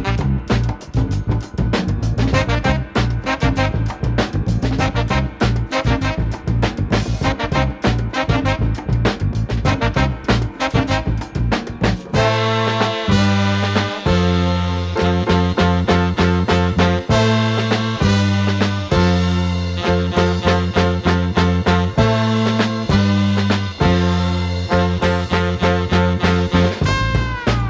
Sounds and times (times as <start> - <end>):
Swing music: 0.0 - 27.6.